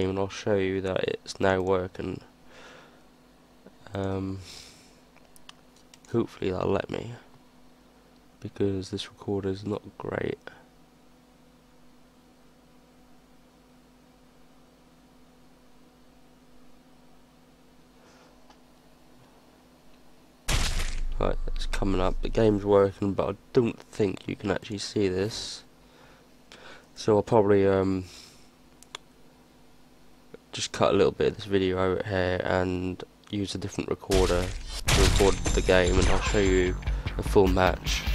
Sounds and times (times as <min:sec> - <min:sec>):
Speech: 0:00.0 - 0:02.3, 0:03.8 - 0:04.4, 0:06.1 - 0:07.3, 0:08.4 - 0:10.7, 0:21.2 - 0:25.7, 0:27.0 - 0:28.1, 0:30.3 - 0:38.0.